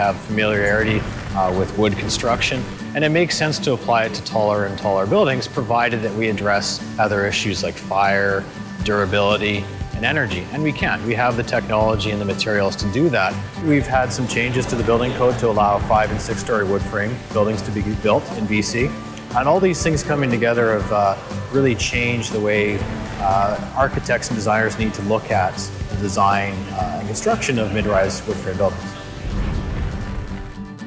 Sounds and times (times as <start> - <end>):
Speech: 0.0 - 29.0
Music: 0.0 - 30.8.